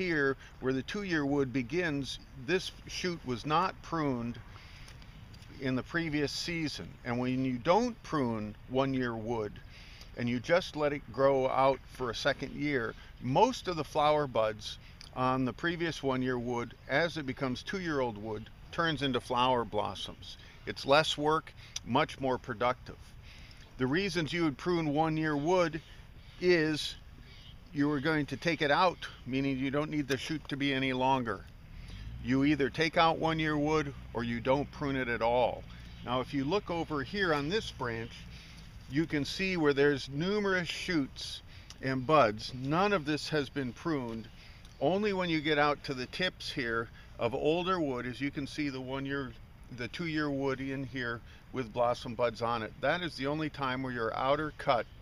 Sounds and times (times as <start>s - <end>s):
Speech: 0.0s - 4.4s, 5.5s - 9.6s, 10.2s - 23.0s, 23.8s - 27.0s, 27.7s - 31.5s, 32.2s - 38.2s, 38.9s - 55.0s.